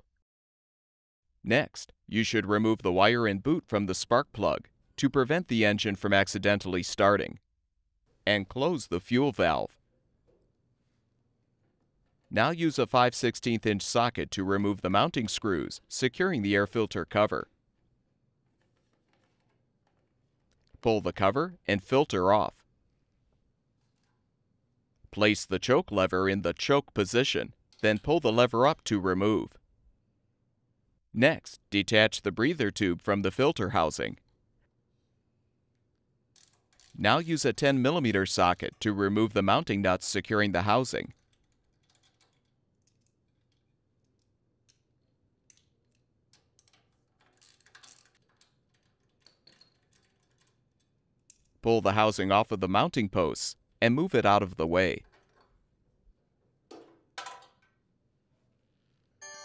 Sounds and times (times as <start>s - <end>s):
Speech: 1.4s - 7.4s, 8.3s - 9.8s, 12.3s - 17.5s, 20.8s - 22.6s, 25.1s - 29.6s, 31.2s - 34.2s, 37.0s - 41.2s, 51.6s - 55.1s.